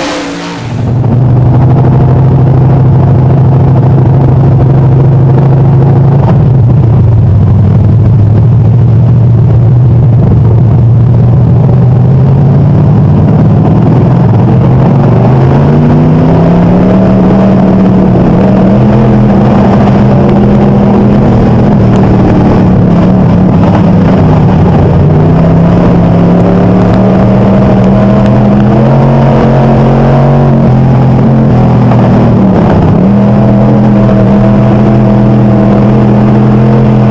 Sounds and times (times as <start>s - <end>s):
Car: 0.0s - 37.1s.